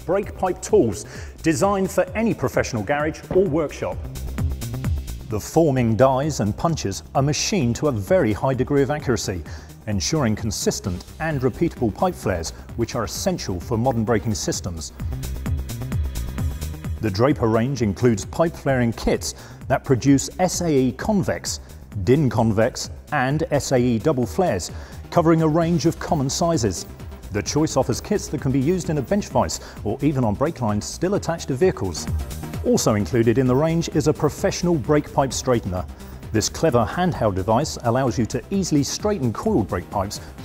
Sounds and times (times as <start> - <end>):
Speech: 0.0 - 4.0, 5.3 - 14.9, 17.0 - 40.3
Music: 0.0 - 40.4.